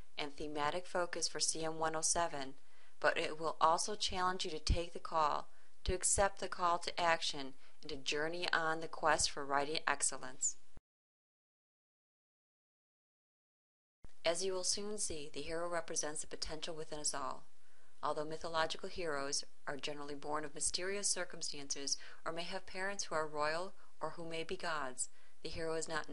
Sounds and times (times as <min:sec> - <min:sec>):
Speech: 0:00.2 - 0:10.6, 0:14.3 - 0:26.1.